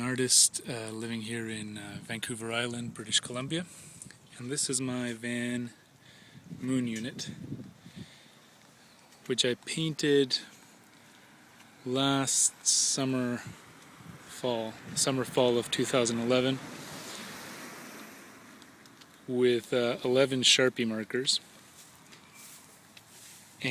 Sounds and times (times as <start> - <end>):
Speech: 0.0 - 3.7, 4.3 - 5.8, 6.6 - 7.4, 9.3 - 10.6, 11.8 - 13.5, 14.3 - 16.6, 19.3 - 21.5.